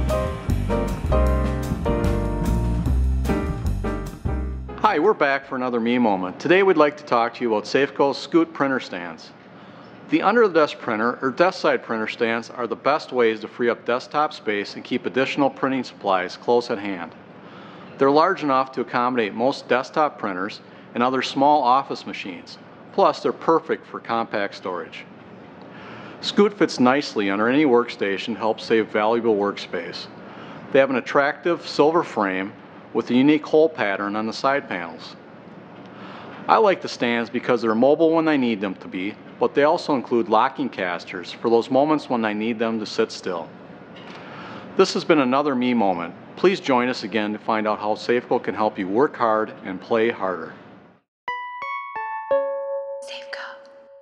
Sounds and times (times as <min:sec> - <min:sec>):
Speech: 0:04.8 - 0:09.4, 0:10.1 - 0:17.2, 0:18.0 - 0:25.1, 0:26.2 - 0:35.2, 0:36.5 - 0:43.5, 0:44.8 - 0:50.6, 0:53.1 - 0:53.6.